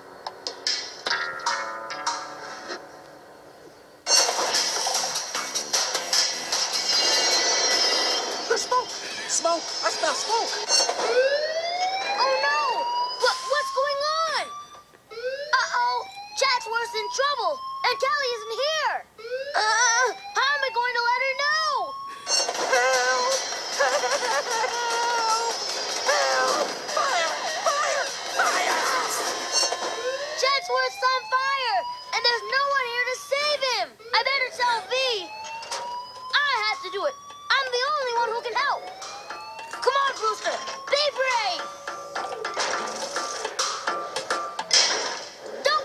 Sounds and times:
Music: 0.0 - 11.4, 22.1 - 30.4, 37.2 - 44.8.

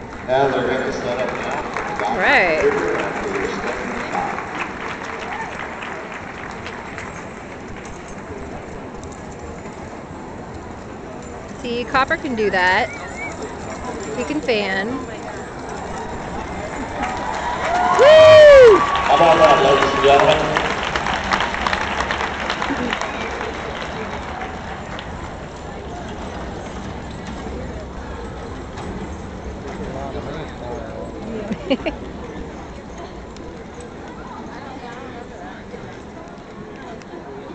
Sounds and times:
Clip-clop: 0.0 - 37.5
Speech: 0.3 - 4.4, 11.6 - 12.9, 19.1 - 20.7.

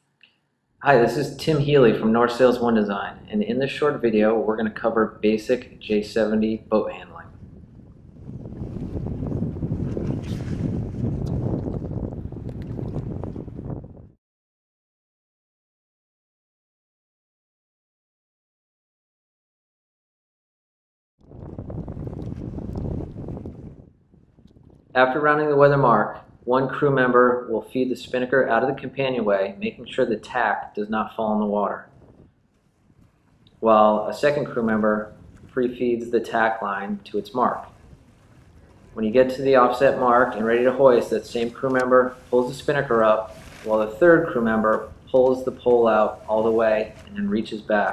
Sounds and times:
Speech: 0.8 - 7.3, 25.0 - 31.8, 33.6 - 37.7, 39.0 - 47.9
Sailboat, sailing ship: 1.9 - 13.8, 21.3 - 23.8, 33.7 - 47.9.

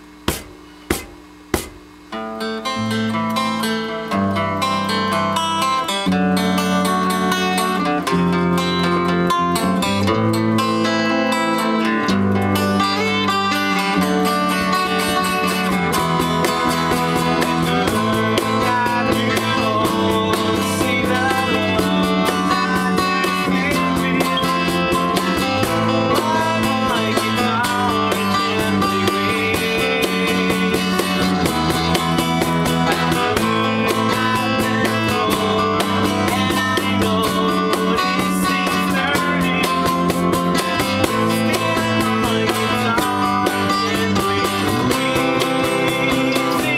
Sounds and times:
Strum: 0.0 - 46.7.

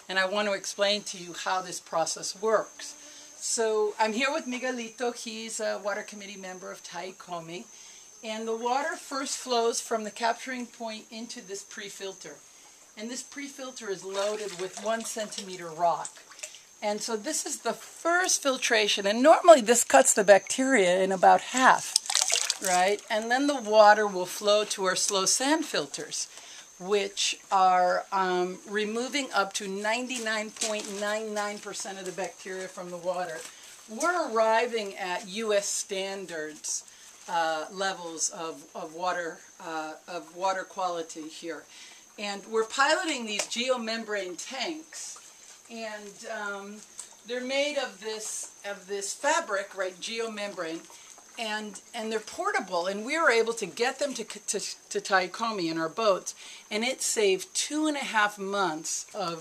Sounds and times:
Speech: 0.1 - 7.6, 8.2 - 12.4, 13.0 - 16.2, 16.8 - 22.0, 22.6 - 50.8, 51.4 - 59.4.

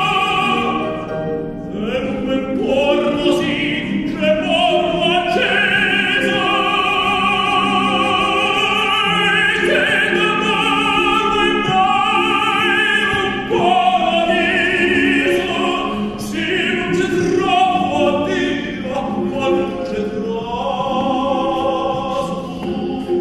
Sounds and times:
Singing: 0.0 - 0.9, 1.7 - 23.2
Opera: 0.0 - 23.2.

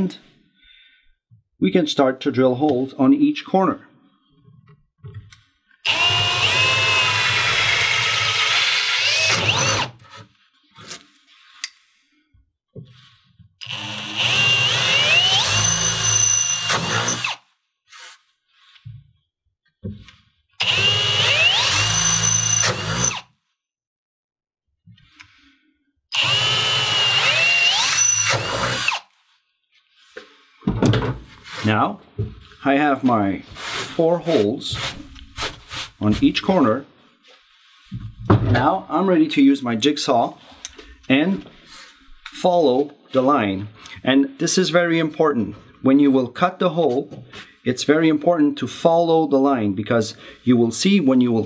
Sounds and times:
Speech: 0.0 - 0.2, 1.6 - 3.9, 31.6 - 32.0, 32.6 - 34.8, 36.0 - 36.9, 38.5 - 40.4, 41.1 - 41.5, 42.4 - 51.4.

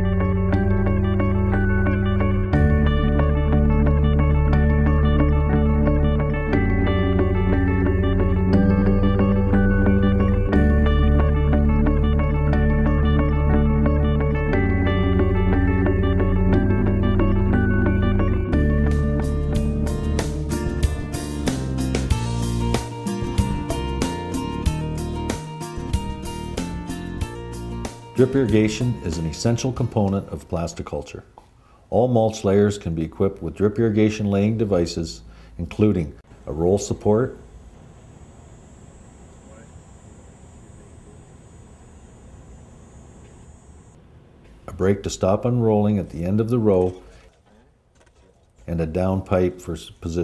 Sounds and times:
Music: 0.0 - 30.7
Speech: 28.2 - 31.3, 31.9 - 37.4, 39.5 - 39.7, 44.7 - 47.1, 48.7 - 50.2.

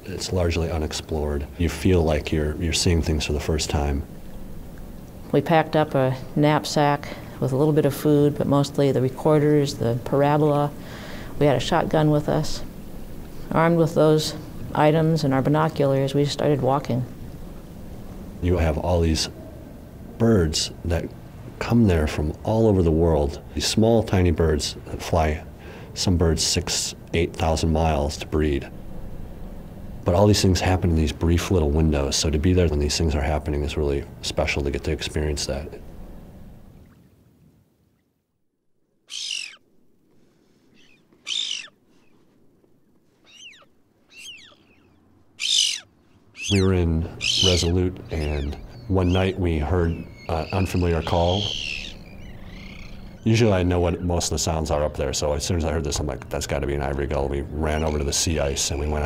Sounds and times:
Speech: 0.0 - 4.1, 5.3 - 10.8, 11.4 - 12.7, 13.5 - 17.1, 20.2 - 28.7, 30.1 - 35.8, 46.5 - 51.6, 53.2 - 59.0
Bird: 39.1 - 39.6, 40.7 - 42.3, 43.1 - 55.0, 57.4 - 59.0.

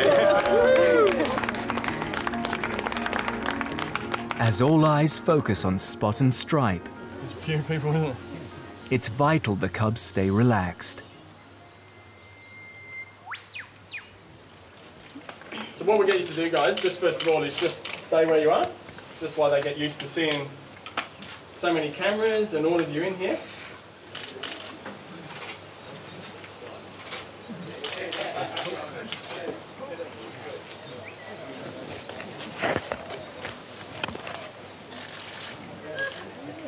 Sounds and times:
Music: 0.0 - 12.9
Speech: 4.4 - 6.9, 8.9 - 11.0.

